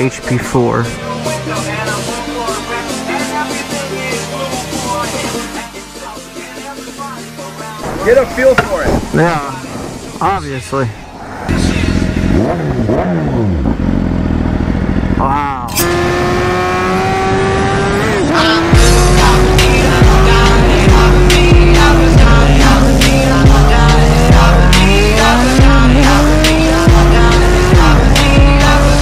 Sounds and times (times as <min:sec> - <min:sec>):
Speech: 0:00.0 - 0:02.1, 0:08.0 - 0:09.6, 0:10.2 - 0:11.0, 0:15.2 - 0:15.8
Music: 0:00.0 - 0:10.5, 0:11.5 - 0:12.6, 0:17.3 - 0:29.0
Motorcycle: 0:11.2 - 0:29.0.